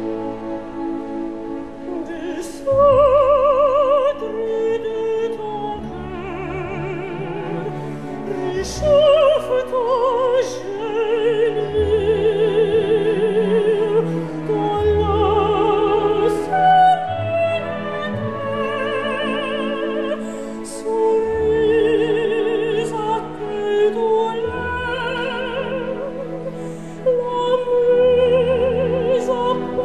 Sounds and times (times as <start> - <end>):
Opera: 0.0 - 29.8.